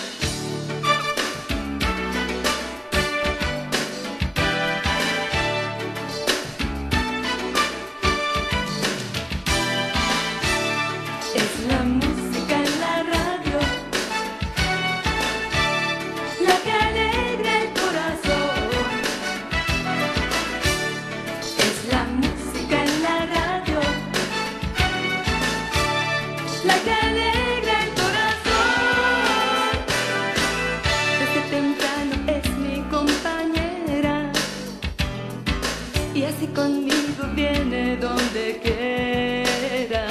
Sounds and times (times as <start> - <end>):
Music: 0.0 - 40.1.